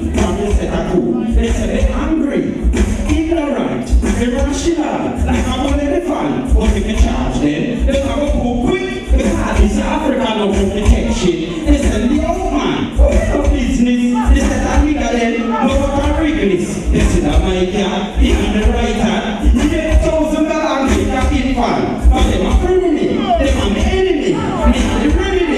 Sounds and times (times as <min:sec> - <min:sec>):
Music: 0:00.0 - 0:25.5.